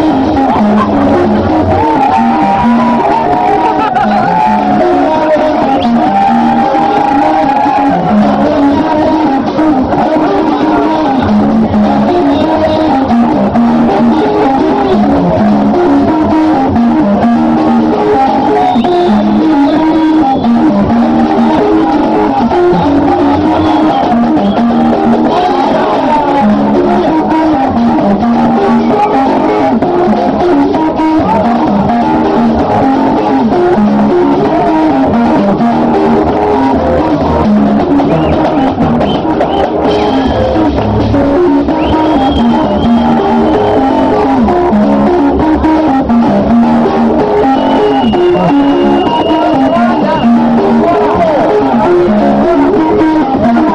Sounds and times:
Music: 0:00.0 - 0:53.7.

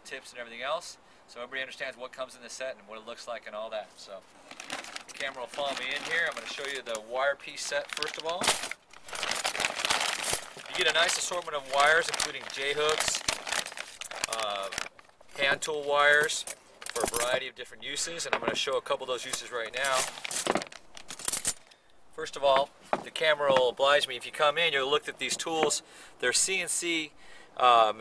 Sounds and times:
Speech: 0:00.0 - 0:04.2, 0:05.1 - 0:08.5, 0:10.7 - 0:13.3, 0:14.3 - 0:14.8, 0:15.4 - 0:20.1, 0:22.2 - 0:28.0.

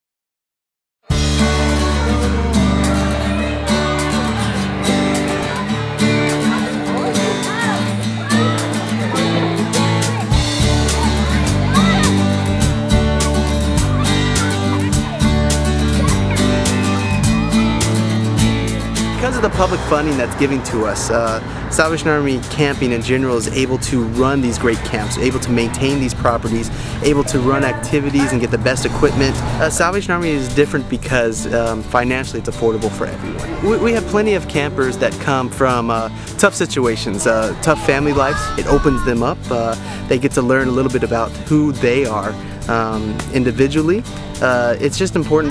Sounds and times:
Music: 0:01.0 - 0:45.5.

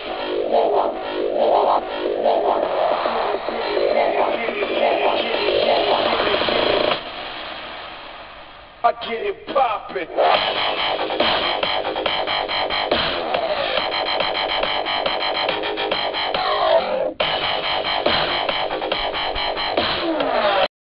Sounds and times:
Dubstep: 0:00.0 - 0:20.7.

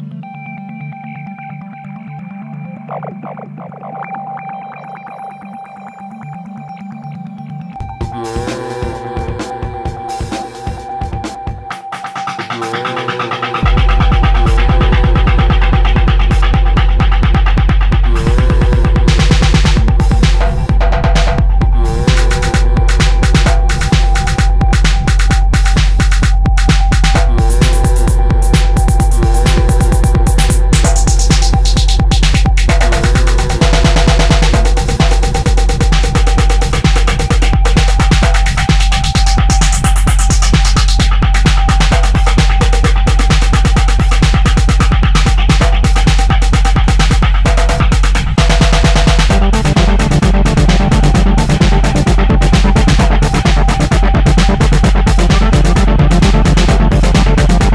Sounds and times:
Techno: 0:00.0 - 0:57.7.

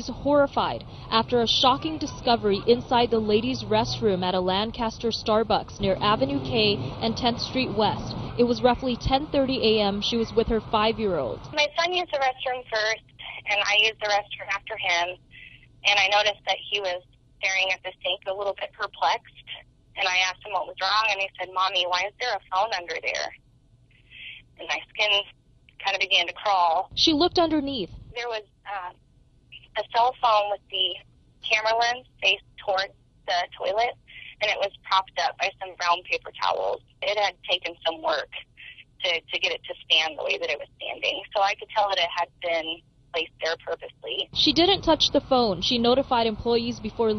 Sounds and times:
Speech: 0:00.0 - 0:23.4, 0:24.1 - 0:29.0, 0:29.6 - 0:47.1.

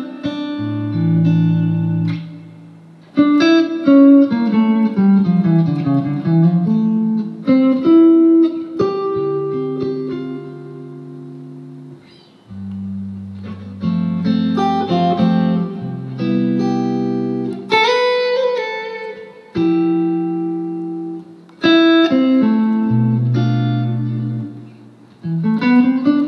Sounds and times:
Electric guitar: 0:00.0 - 0:26.2
Jazz: 0:00.0 - 0:26.2.

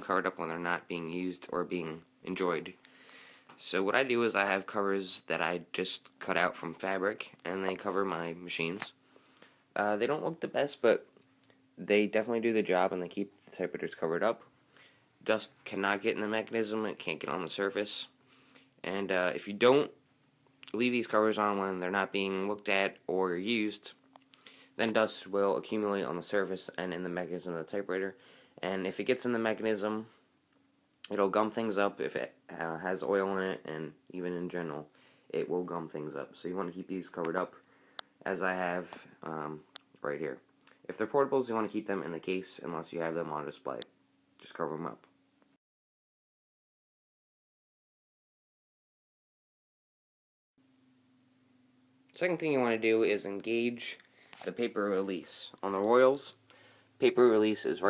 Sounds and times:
Speech: 0:00.0 - 0:02.8, 0:03.6 - 0:09.0, 0:09.8 - 0:11.1, 0:11.8 - 0:14.5, 0:15.2 - 0:18.2, 0:18.8 - 0:20.0, 0:20.7 - 0:24.0, 0:24.8 - 0:30.2, 0:31.1 - 0:37.6, 0:38.2 - 0:45.1, 0:52.2 - 0:56.4, 0:57.0 - 0:57.9.

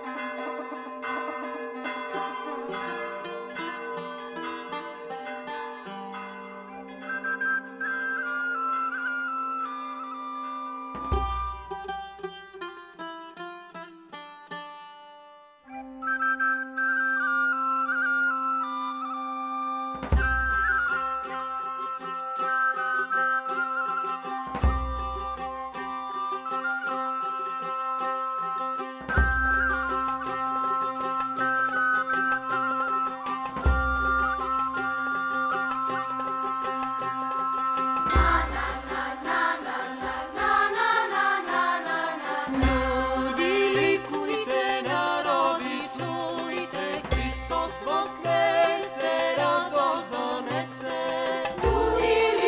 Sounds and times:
Music: 0:00.0 - 0:52.4.

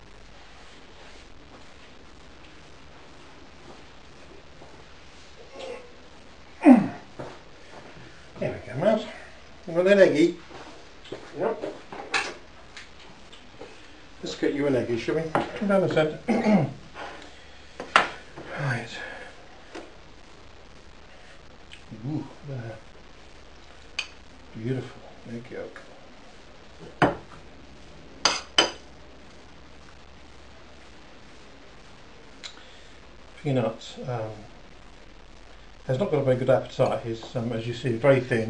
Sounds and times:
Speech: 0:08.4 - 0:10.4, 0:14.2 - 0:16.8, 0:18.5 - 0:19.2, 0:21.9 - 0:22.8, 0:24.5 - 0:25.9, 0:33.4 - 0:34.5, 0:35.9 - 0:38.5.

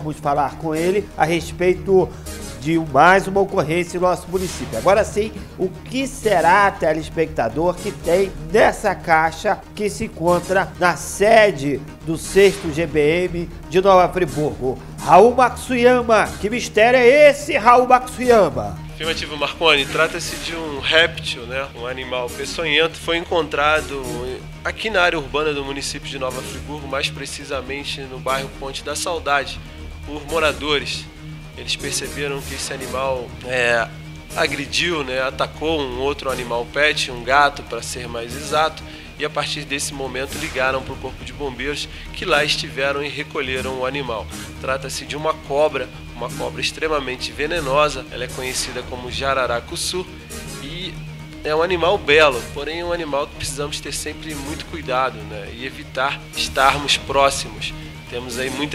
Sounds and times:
Music: 0:00.0 - 0:58.7
Speech: 0:00.0 - 0:58.7.

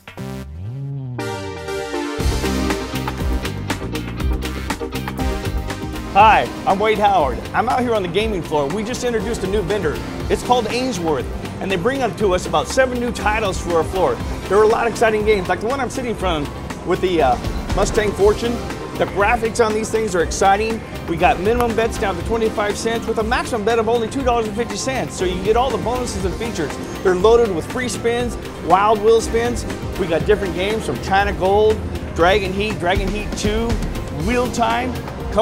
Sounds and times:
Music: 0:00.0 - 0:35.4
Speech: 0:06.2 - 0:35.4.

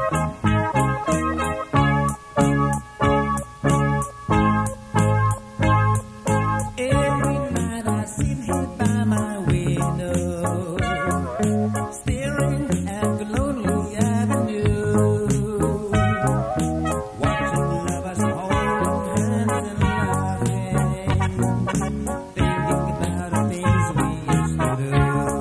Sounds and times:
Funk: 0:00.0 - 0:25.4.

